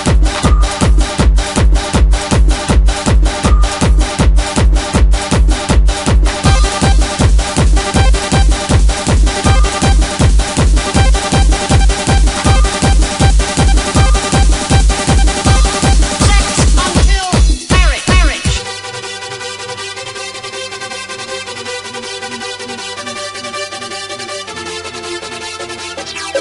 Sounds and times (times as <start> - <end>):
Electronica: 0.0 - 26.4.